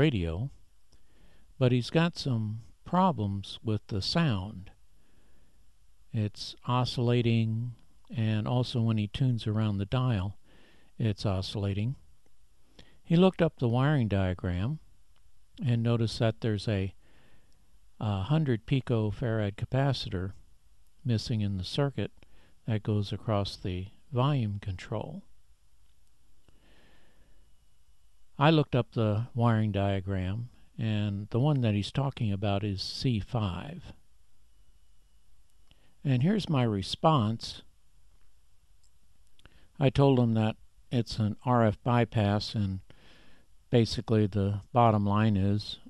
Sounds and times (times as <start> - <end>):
Speech: 0.0 - 0.6, 1.6 - 4.8, 6.1 - 10.4, 11.0 - 12.0, 13.0 - 14.9, 15.6 - 17.0, 18.0 - 20.4, 21.0 - 25.3, 28.4 - 34.0, 36.0 - 37.7, 39.8 - 42.9, 43.7 - 45.8.